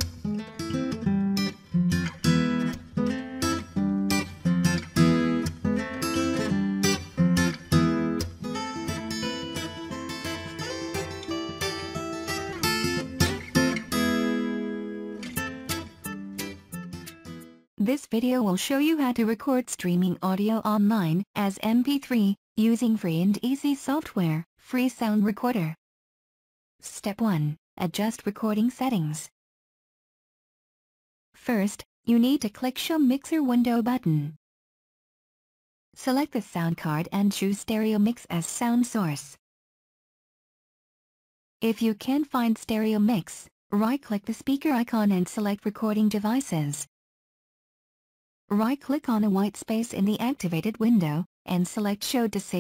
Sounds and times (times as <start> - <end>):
Speech: 17.8 - 25.8, 26.8 - 29.3, 31.4 - 34.4, 36.0 - 39.4, 41.6 - 46.9, 48.5 - 52.6.